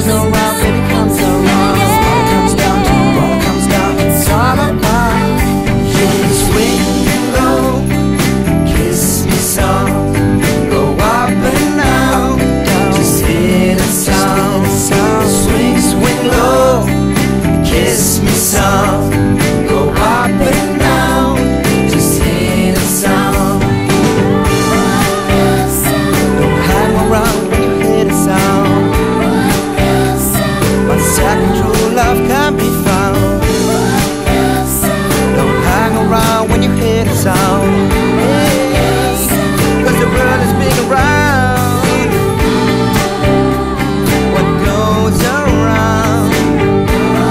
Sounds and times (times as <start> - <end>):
Music: 0.0 - 47.3
Singing: 0.0 - 47.3.